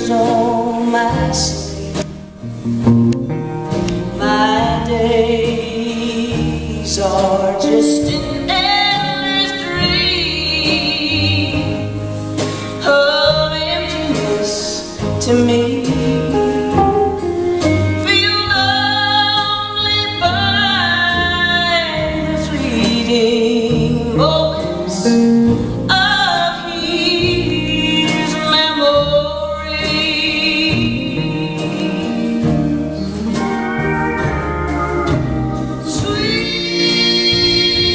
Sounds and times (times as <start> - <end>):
Country: 0.0 - 37.9
Guitar: 0.0 - 37.9.